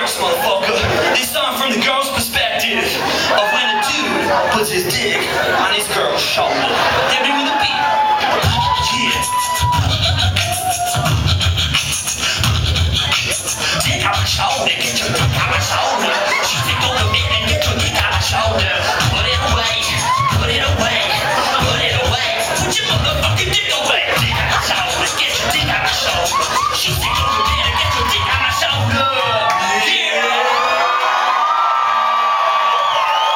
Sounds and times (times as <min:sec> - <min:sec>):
Music: 0:08.4 - 0:29.4.